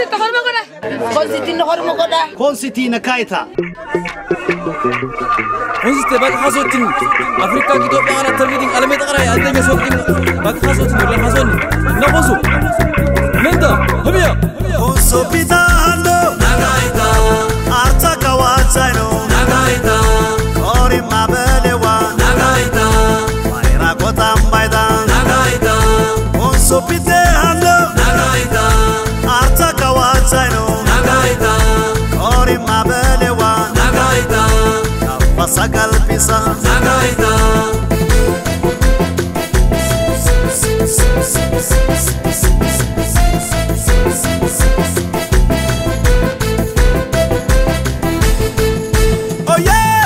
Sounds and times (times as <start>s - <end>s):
Music: 3.5s - 50.0s.